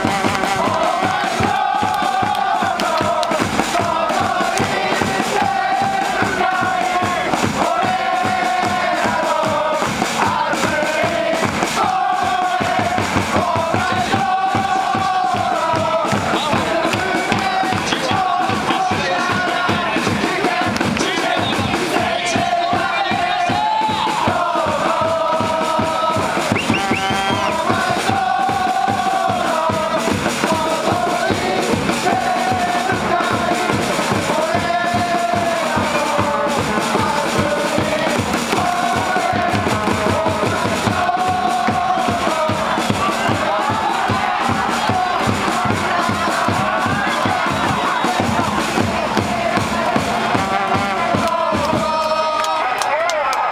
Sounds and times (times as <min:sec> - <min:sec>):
Vocal music: 0:00.0 - 0:53.3
Cheering: 0:00.0 - 0:53.5
Crowd: 0:00.0 - 0:53.5.